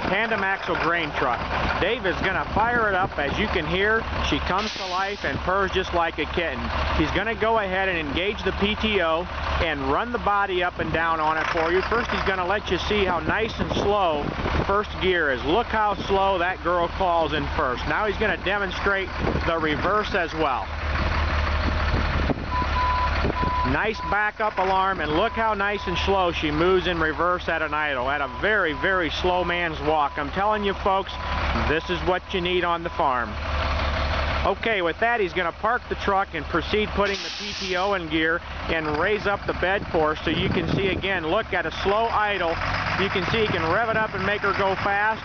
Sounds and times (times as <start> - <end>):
Speech: 0.0 - 20.7, 23.7 - 33.4, 34.4 - 45.2
Reversing beeps: 22.5 - 24.2, 28.2 - 29.1, 32.7 - 33.3.